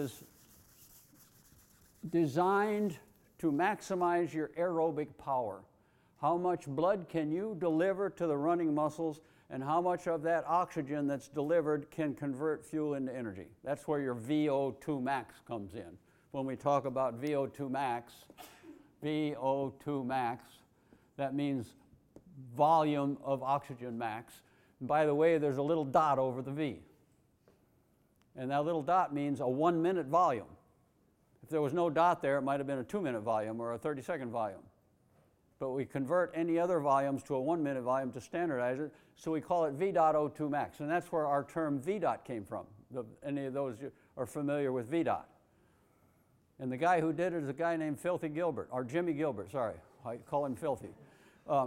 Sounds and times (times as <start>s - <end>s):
Speech: 2.0s - 18.3s, 19.0s - 20.6s, 21.2s - 21.8s, 22.4s - 26.9s, 28.4s - 30.6s, 31.4s - 34.7s, 35.6s - 45.3s, 46.6s - 51.6s.